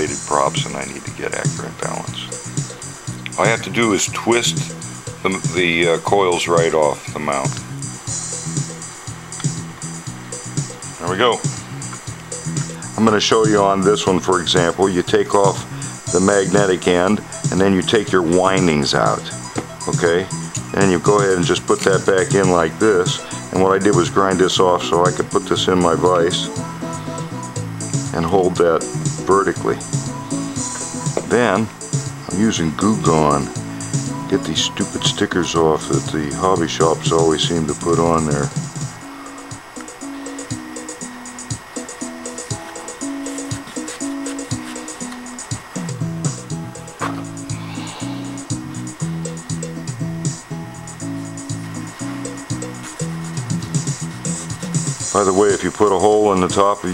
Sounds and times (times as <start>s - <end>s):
Speech: 0.0s - 2.4s, 3.3s - 7.6s, 11.0s - 11.4s, 12.9s - 26.5s, 28.1s - 29.8s, 31.3s - 31.7s, 32.3s - 33.6s, 34.3s - 38.6s, 55.1s - 56.9s
Music: 0.0s - 56.9s.